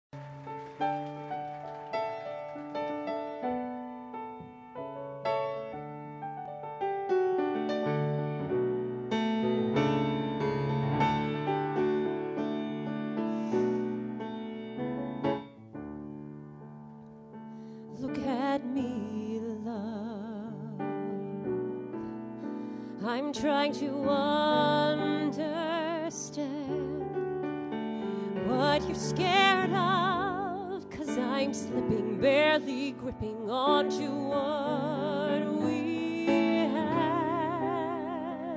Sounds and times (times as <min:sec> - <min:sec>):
Piano: 0:00.0 - 0:38.5.